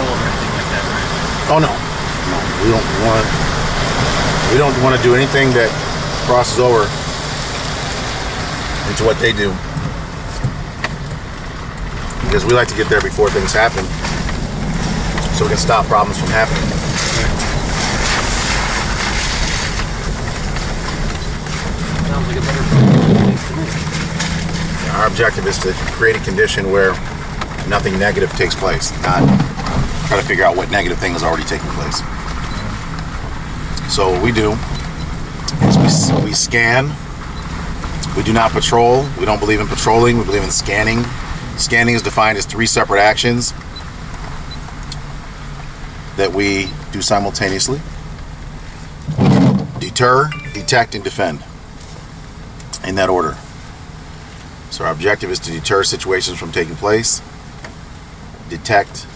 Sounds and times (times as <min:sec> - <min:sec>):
Speech: 0:00.0 - 0:03.4, 0:04.4 - 0:07.0, 0:08.8 - 0:09.7, 0:12.2 - 0:14.0, 0:15.3 - 0:17.4, 0:22.0 - 0:23.8, 0:24.8 - 0:29.5, 0:30.1 - 0:32.1, 0:33.8 - 0:34.7, 0:35.5 - 0:37.0, 0:38.0 - 0:43.6, 0:46.2 - 0:47.8, 0:49.8 - 0:51.5, 0:52.7 - 0:53.4, 0:54.7 - 0:57.3, 0:58.5 - 0:59.1.